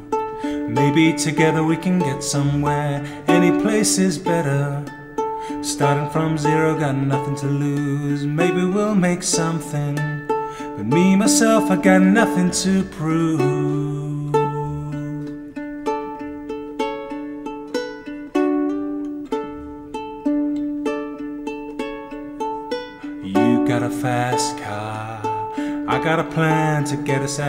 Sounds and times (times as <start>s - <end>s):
Music: 0.0s - 27.4s.